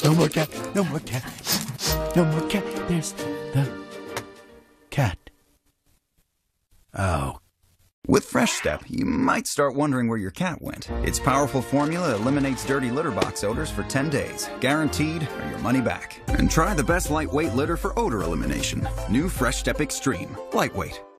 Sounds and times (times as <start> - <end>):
Speech: 0.0 - 3.8, 4.9 - 5.3, 7.0 - 7.4, 8.0 - 21.0
Music: 0.0 - 4.9, 10.8 - 21.1.